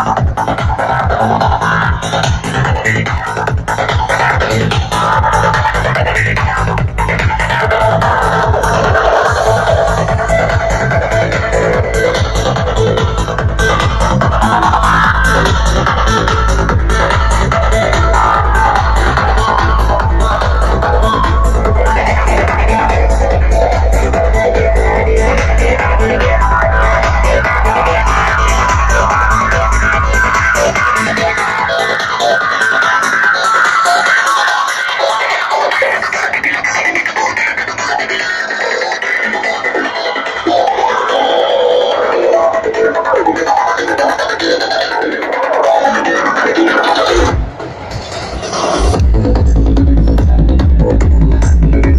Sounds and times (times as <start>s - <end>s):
Music: 0.0s - 51.9s.